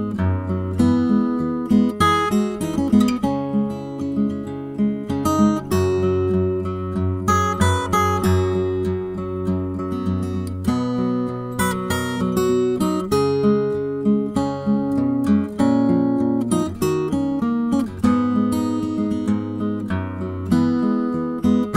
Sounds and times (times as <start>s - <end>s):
Acoustic guitar: 0.0s - 21.7s.